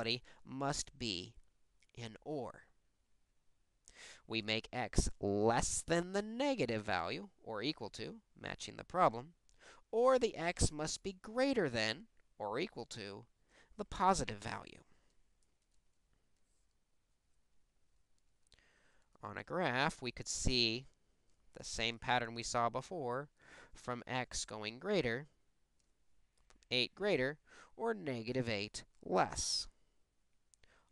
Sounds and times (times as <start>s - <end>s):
Speech: 0.0s - 2.7s, 4.3s - 14.9s, 19.2s - 25.4s, 26.7s - 29.8s.